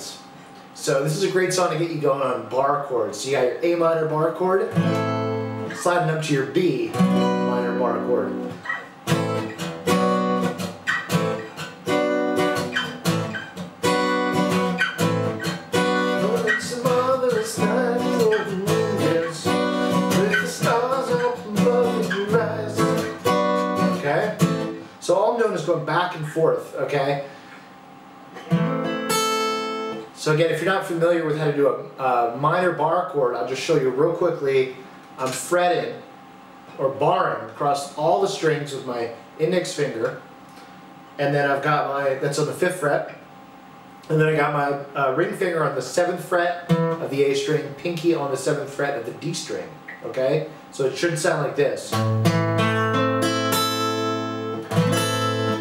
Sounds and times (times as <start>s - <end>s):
Speech: 0.0s - 4.8s, 5.7s - 8.4s, 24.0s - 24.4s, 25.0s - 27.3s, 30.2s - 36.0s, 36.7s - 40.2s, 41.2s - 43.2s, 44.1s - 52.0s
Acoustic guitar: 4.3s - 26.5s, 28.3s - 30.1s, 45.9s - 48.6s, 51.9s - 55.6s
Strum: 6.9s - 24.8s, 51.9s - 55.6s.